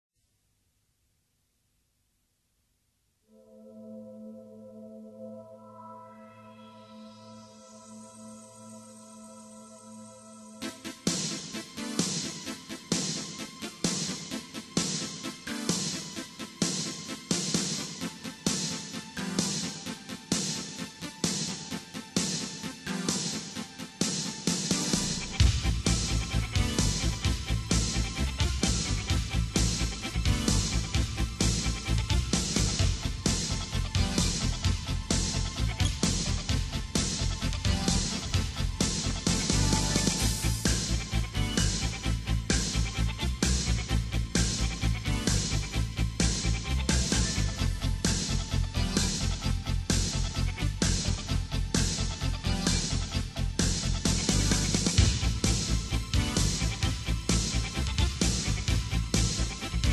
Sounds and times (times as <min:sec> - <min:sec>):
Music: 0:03.2 - 0:59.9.